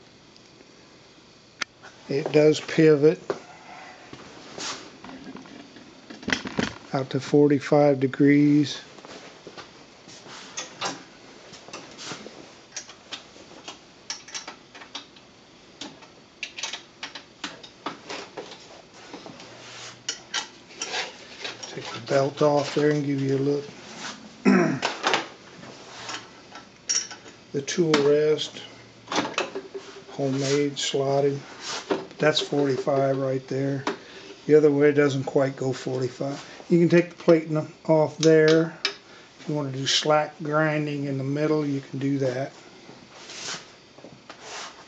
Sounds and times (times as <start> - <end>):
Speech: 2.1 - 3.2, 6.9 - 8.9, 21.7 - 23.7, 27.6 - 28.7, 30.1 - 31.5, 32.2 - 33.9, 34.5 - 38.8, 39.4 - 42.6.